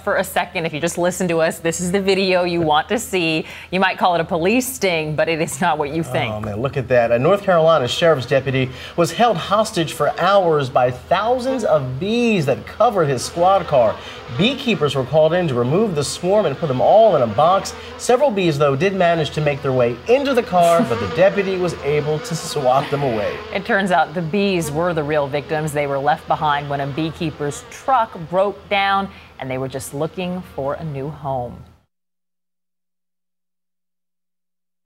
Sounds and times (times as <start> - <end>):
Speech: 0.0 - 31.6.